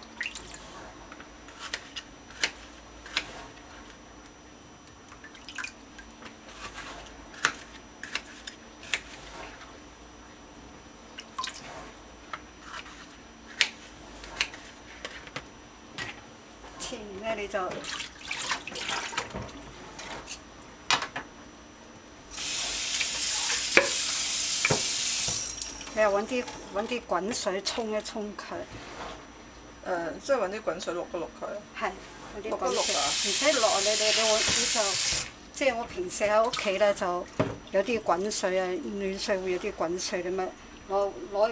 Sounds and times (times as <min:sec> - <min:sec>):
Speech: 0:16.8 - 0:17.8, 0:26.0 - 0:28.7, 0:29.9 - 0:35.0, 0:35.6 - 0:41.5.